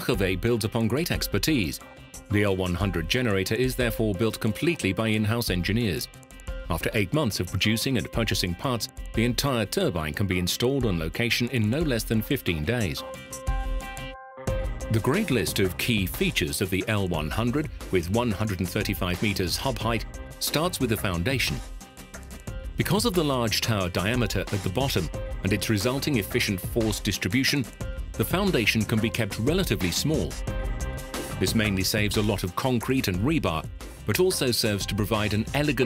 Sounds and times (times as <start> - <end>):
Speech: 0.0 - 6.1, 6.7 - 13.0, 14.9 - 21.6, 22.8 - 30.4, 31.4 - 35.8
Music: 0.0 - 35.8.